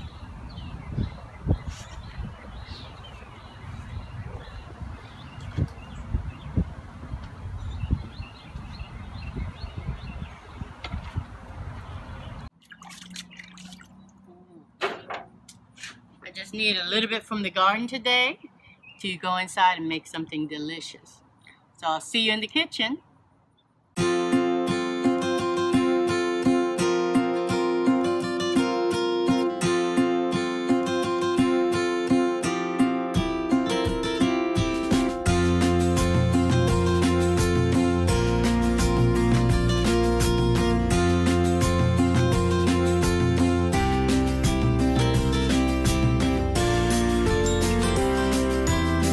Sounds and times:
Liquid: 0:12.6 - 0:14.3.

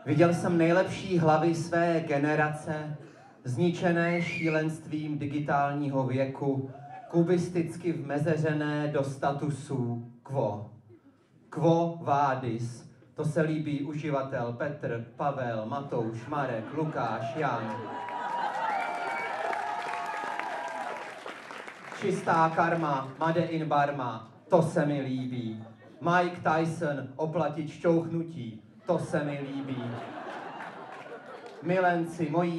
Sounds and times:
Speech: 0:00.0 - 0:10.7, 0:11.5 - 0:18.0, 0:22.0 - 0:30.1, 0:31.6 - 0:32.5.

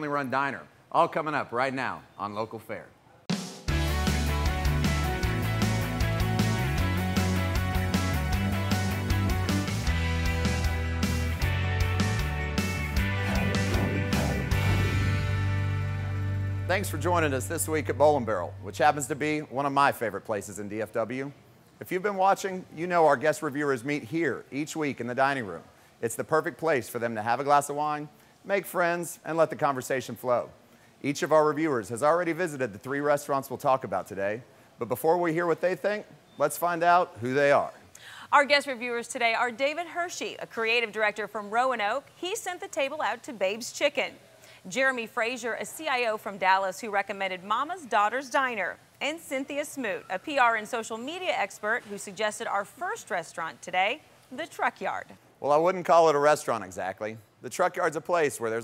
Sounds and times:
Music: 0:03.3 - 0:19.1.

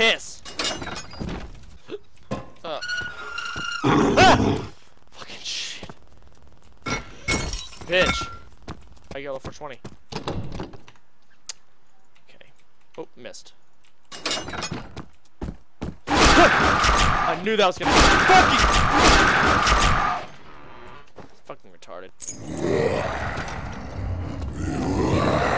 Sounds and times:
Speech: 0:09.2 - 0:09.8, 0:17.3 - 0:18.6, 0:21.4 - 0:22.1.

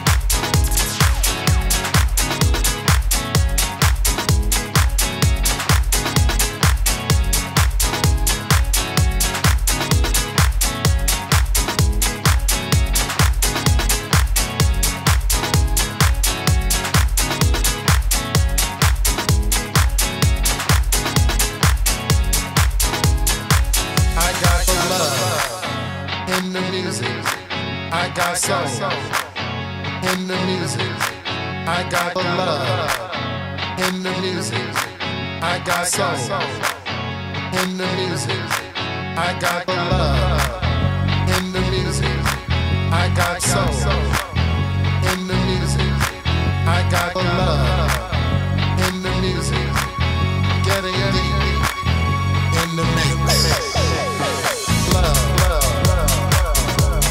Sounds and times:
Music: 0:00.0 - 0:57.1.

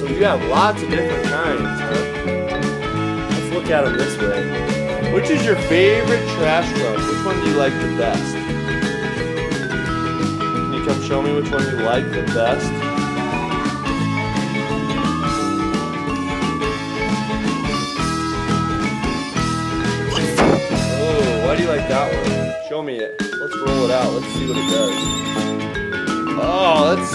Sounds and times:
Speech: 0:00.0 - 0:01.9, 0:03.4 - 0:04.4, 0:05.0 - 0:08.3, 0:10.7 - 0:12.7, 0:21.0 - 0:25.1, 0:26.4 - 0:27.1.

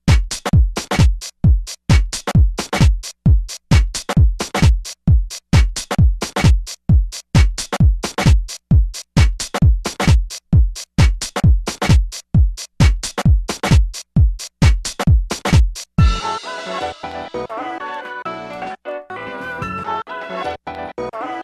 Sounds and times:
Music: 0:00.0 - 0:21.4.

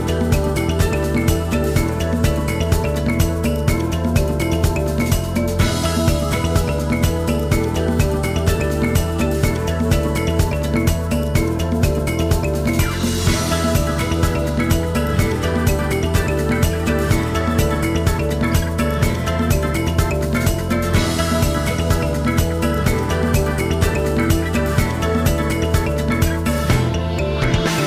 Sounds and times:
Video game music: 0:00.0 - 0:27.8.

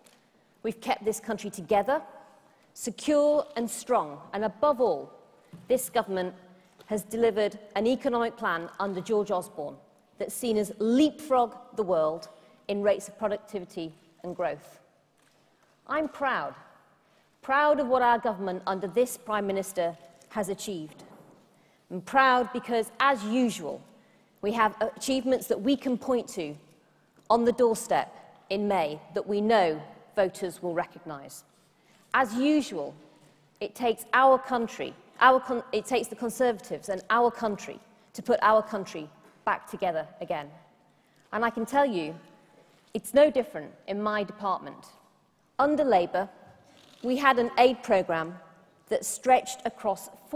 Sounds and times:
Narration, monologue: 0:00.0 - 0:50.3
Female speech, woman speaking: 0:00.7 - 0:02.0, 0:02.8 - 0:05.1, 0:05.7 - 0:14.7, 0:15.9 - 0:16.6, 0:17.5 - 0:21.0, 0:22.0 - 0:23.8, 0:24.5 - 0:26.6, 0:27.3 - 0:31.4, 0:32.2 - 0:33.0, 0:33.6 - 0:40.5, 0:41.4 - 0:42.2, 0:43.0 - 0:44.9, 0:45.6 - 0:46.3, 0:47.0 - 0:50.3.

